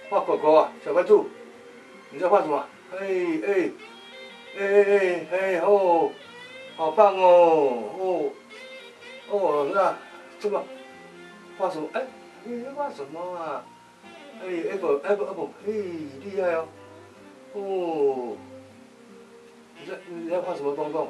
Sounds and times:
Music: 0.0s - 21.1s
Speech: 0.1s - 1.3s, 2.2s - 3.8s, 4.6s - 6.2s, 6.8s - 8.4s, 9.3s - 10.7s, 11.6s - 13.7s, 14.4s - 16.7s, 17.6s - 18.4s, 19.8s - 21.1s.

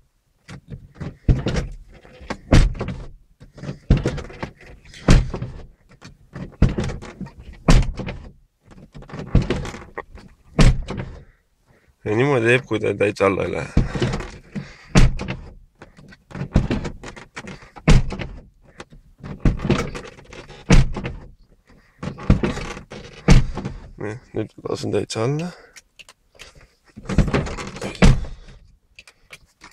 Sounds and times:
Speech: 12.0s - 13.8s, 24.0s - 25.7s.

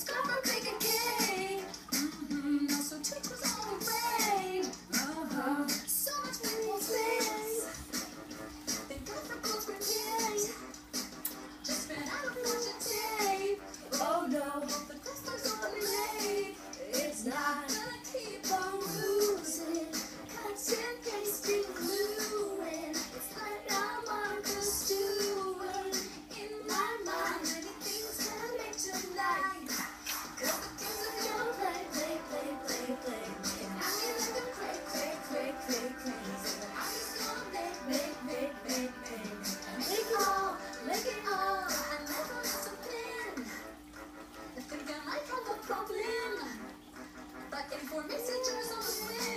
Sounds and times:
Child singing: 0.0s - 7.8s, 8.9s - 10.6s, 11.7s - 43.6s, 44.7s - 46.6s, 47.5s - 49.3s
Music: 0.0s - 49.3s.

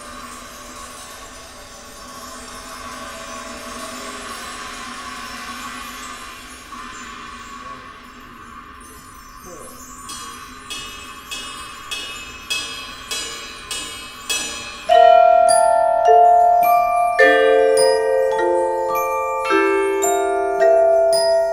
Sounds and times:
Music: 0.0s - 21.5s
Speech: 9.4s - 9.9s.

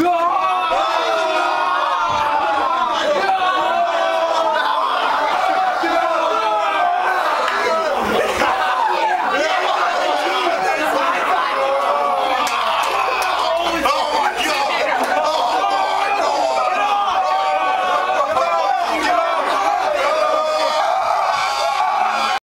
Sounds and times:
Speech: 0.0s - 21.0s.

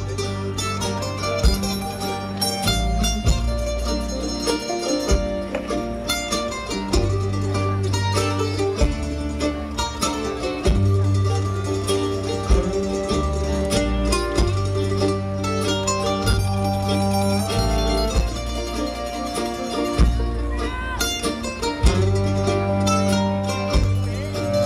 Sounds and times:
Flamenco: 0.0s - 24.6s
Orchestra: 0.0s - 24.6s.

